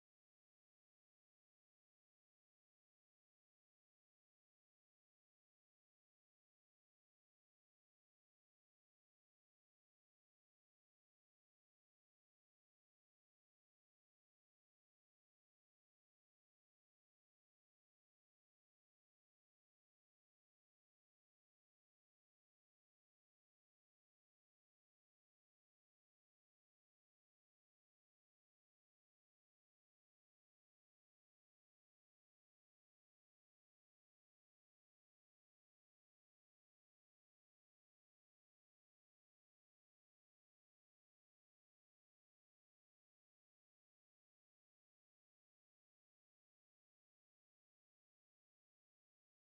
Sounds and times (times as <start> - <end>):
Music: 0.0 - 49.5.